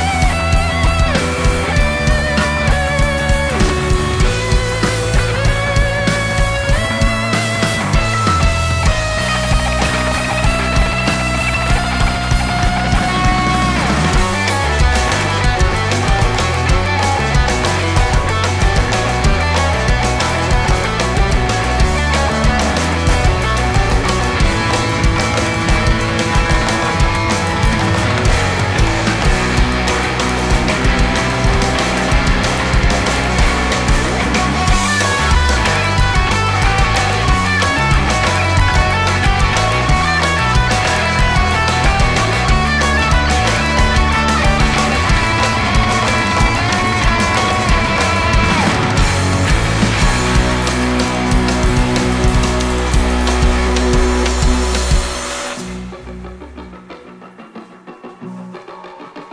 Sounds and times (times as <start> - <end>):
Drum: 0.0 - 57.7
Drum kit: 0.0 - 59.3
Guitar: 0.0 - 59.3
Progressive rock: 0.0 - 59.3.